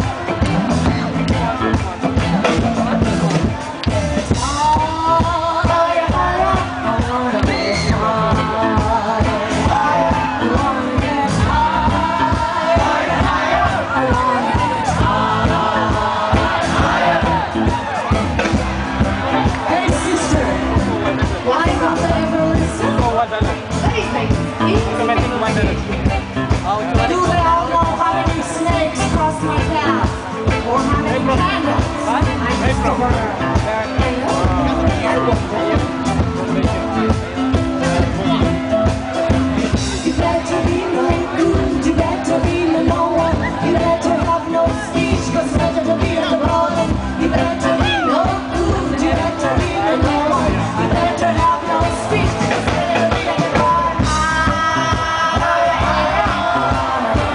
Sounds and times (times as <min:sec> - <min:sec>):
Music: 0:00.0 - 0:57.3
Speech: 0:19.4 - 0:38.8.